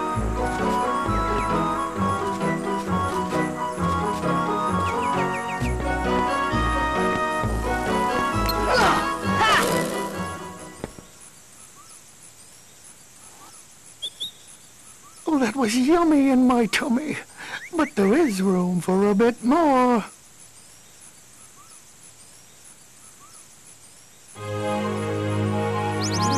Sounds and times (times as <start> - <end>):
Music: 0.0 - 10.9, 24.4 - 26.3
Environmental noise: 0.0 - 26.3
Speech: 15.3 - 20.1.